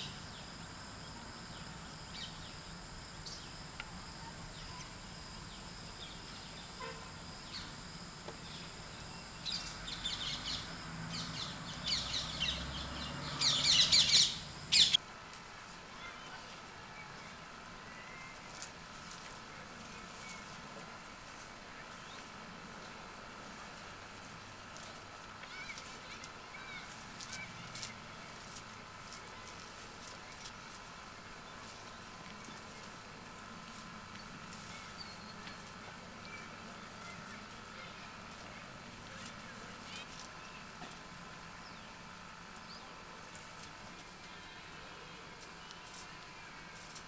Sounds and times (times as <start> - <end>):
Environmental noise: 0.0 - 47.0.